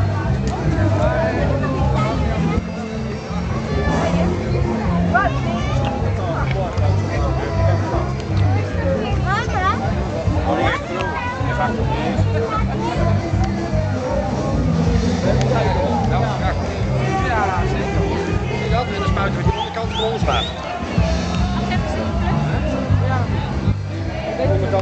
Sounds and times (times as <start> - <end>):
Music: 0.0 - 24.8
Speech: 0.0 - 24.8.